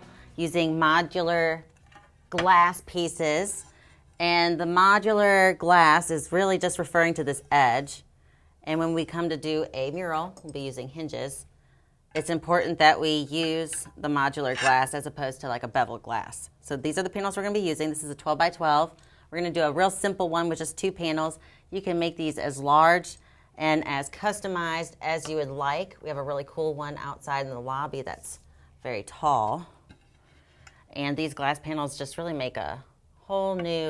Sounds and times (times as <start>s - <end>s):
Speech: 0.4s - 1.6s, 2.4s - 3.6s, 4.2s - 8.0s, 8.7s - 11.5s, 12.2s - 29.7s, 31.0s - 33.8s.